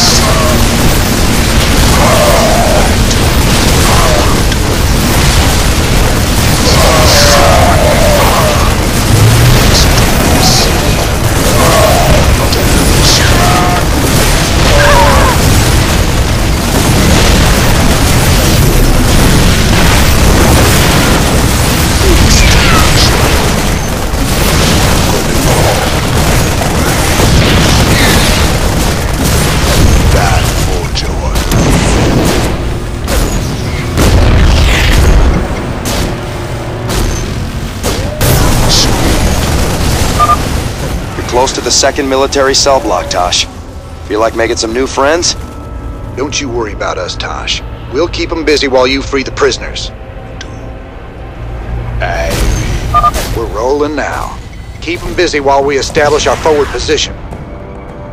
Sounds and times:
Boom: 0.0 - 43.4.

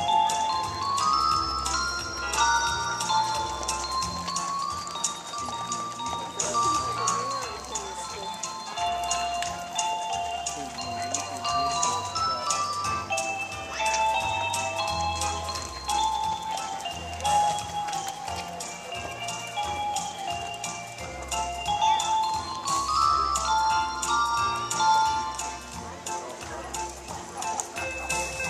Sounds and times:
Music: 0.0 - 28.5
Speech: 0.0 - 28.5.

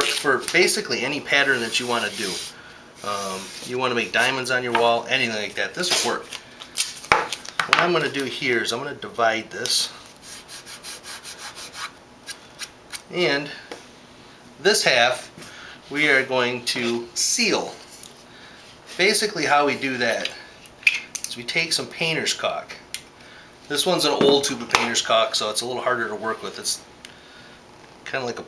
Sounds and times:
Speech: 0.0 - 6.3, 7.8 - 10.0, 13.1 - 13.7, 14.6 - 15.3, 15.9 - 17.8, 19.0 - 20.5, 21.3 - 22.8, 23.7 - 26.9, 28.0 - 28.4
Inside, small room: 0.0 - 28.4.

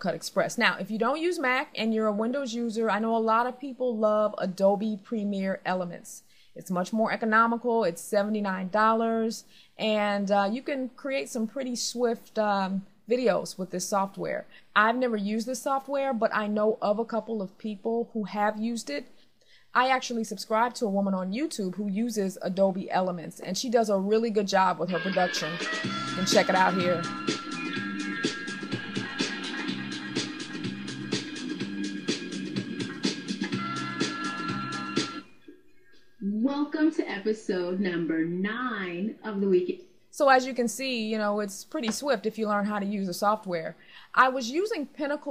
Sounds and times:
Speech: 19.8 - 25.6, 26.2 - 27.0, 36.2 - 45.3
Music: 24.9 - 36.1.

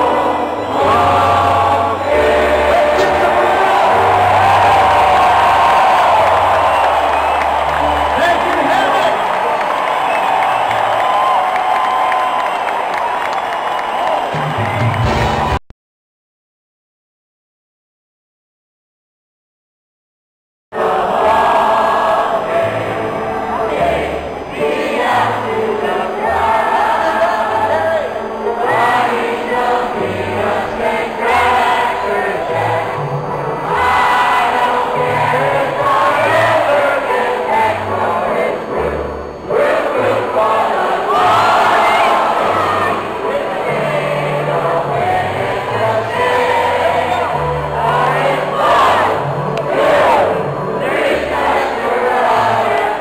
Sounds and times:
Music: 0.0 - 15.6, 20.8 - 53.0
Speech: 8.1 - 9.4.

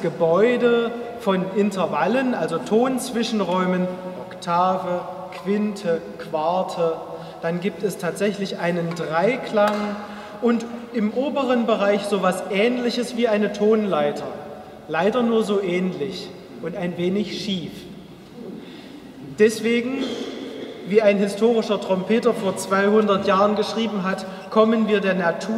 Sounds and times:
Speech: 0.0 - 18.6, 19.3 - 25.5.

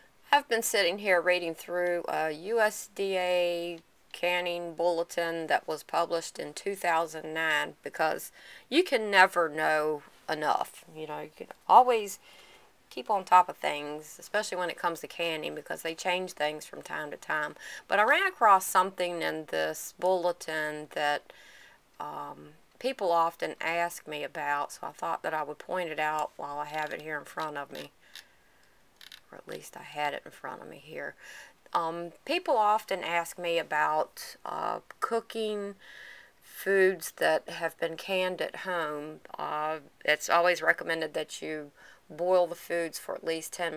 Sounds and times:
Speech: 0.3 - 12.2, 12.9 - 21.2, 22.0 - 27.9, 29.3 - 35.8, 36.5 - 43.7.

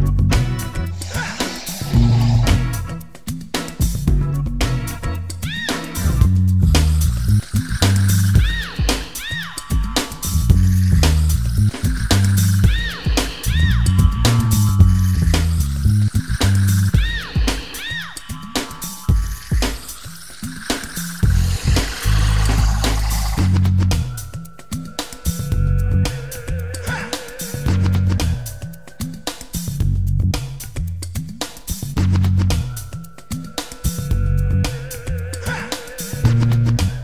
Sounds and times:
Music: 0.0 - 37.0.

